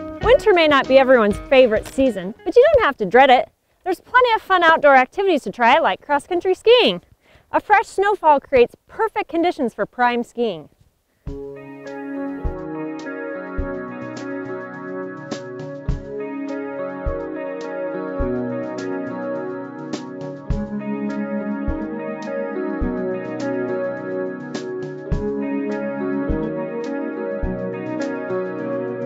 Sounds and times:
Music: 0:00.0 - 0:03.0, 0:11.3 - 0:29.0
Speech: 0:00.2 - 0:10.7.

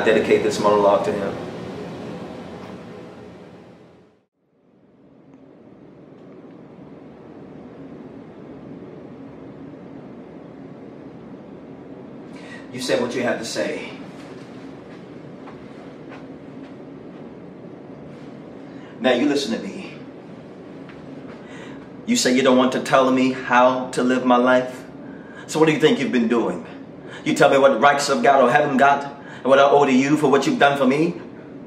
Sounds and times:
Narration, monologue: 0:00.0 - 0:02.0, 0:09.2 - 0:31.6.

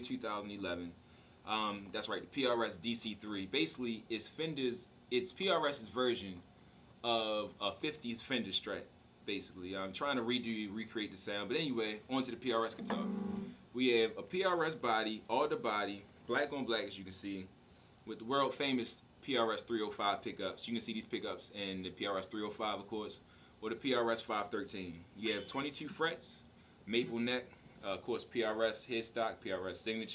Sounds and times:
Speech: 0:00.0 - 0:06.4, 0:07.0 - 0:13.0, 0:13.8 - 0:17.5, 0:18.1 - 0:30.1.

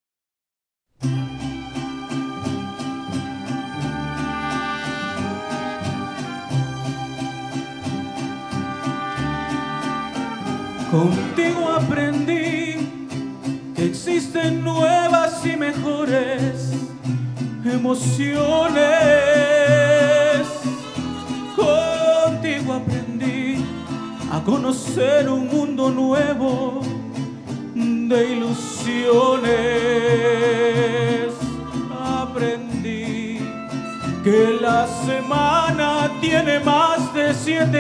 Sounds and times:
Violin, fiddle: 0:01.1 - 0:11.8, 0:23.6 - 0:24.6.

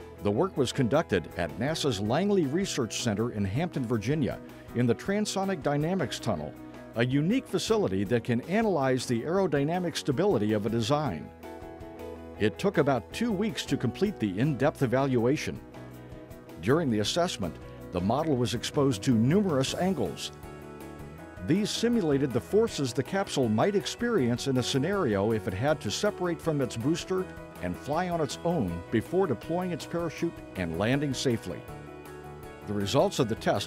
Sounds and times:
Music: 0:00.0 - 0:33.6
Speech: 0:00.2 - 0:11.3, 0:12.4 - 0:15.6, 0:16.6 - 0:20.3, 0:21.4 - 0:31.6, 0:32.7 - 0:33.6.

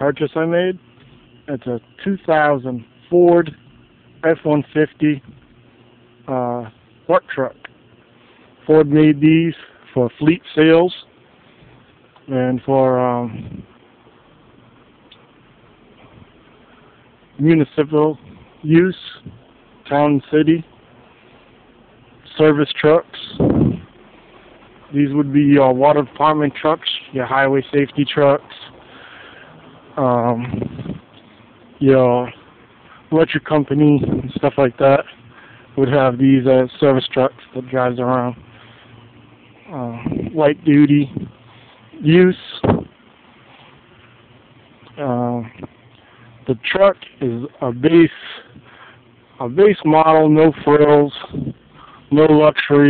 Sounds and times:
Speech: 0:00.0 - 0:00.9, 0:01.5 - 0:03.6, 0:04.2 - 0:05.3, 0:06.2 - 0:07.6, 0:08.6 - 0:11.1, 0:12.2 - 0:13.6, 0:17.4 - 0:20.7, 0:22.2 - 0:23.5, 0:24.9 - 0:28.8, 0:30.0 - 0:31.0, 0:31.8 - 0:32.4, 0:33.1 - 0:35.2, 0:35.8 - 0:38.4, 0:39.7 - 0:41.3, 0:41.9 - 0:42.8, 0:44.9 - 0:45.7, 0:46.4 - 0:48.6, 0:49.4 - 0:52.8.

